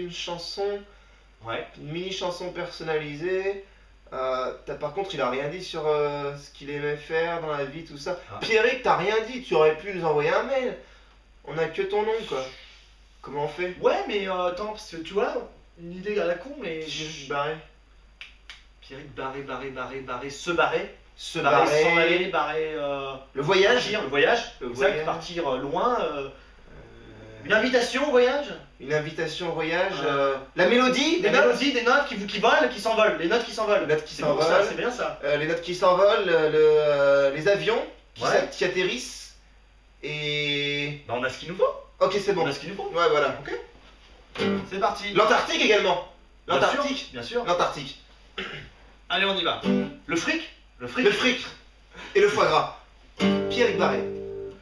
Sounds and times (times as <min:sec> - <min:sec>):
Speech: 0:00.0 - 0:10.8, 0:11.5 - 0:17.7, 0:18.8 - 0:39.4, 0:40.0 - 0:43.8, 0:44.6 - 0:52.8, 0:53.5 - 0:54.1.